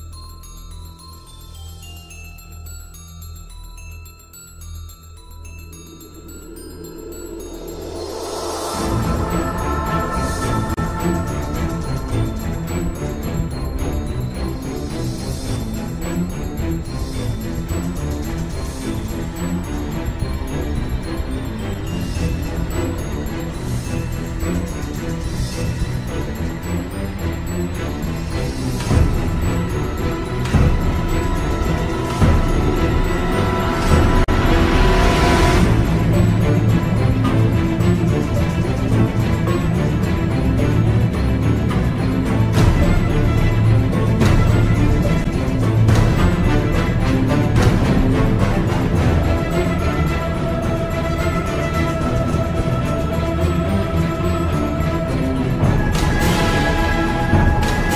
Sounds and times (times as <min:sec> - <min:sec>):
Music: 0:00.0 - 0:57.9.